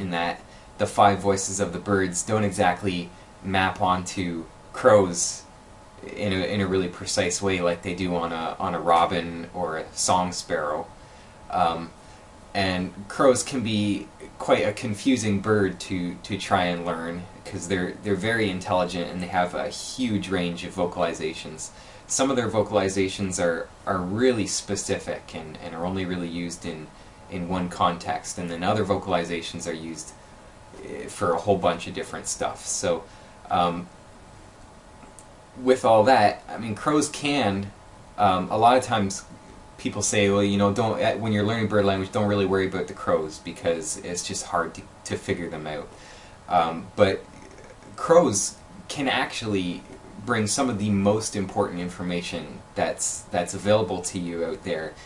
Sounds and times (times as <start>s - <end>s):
Speech: 0.0s - 10.9s, 11.5s - 12.0s, 12.6s - 30.2s, 30.8s - 33.9s, 35.6s - 55.0s.